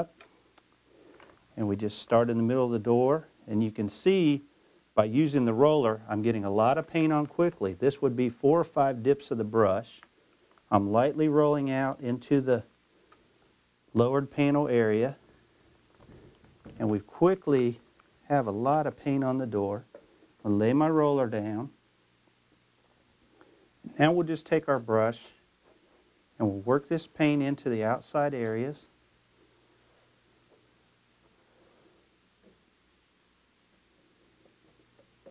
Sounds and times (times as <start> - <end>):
Speech: 1.6 - 10.1, 10.7 - 12.7, 13.9 - 15.2, 16.8 - 21.8, 23.8 - 25.4, 26.4 - 28.9.